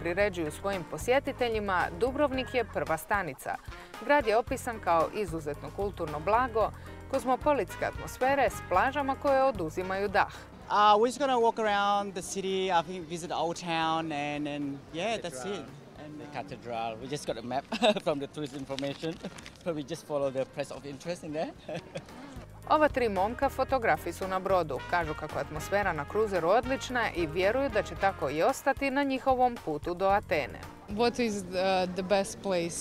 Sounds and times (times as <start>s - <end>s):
Music: 0.0s - 18.3s, 19.6s - 32.8s.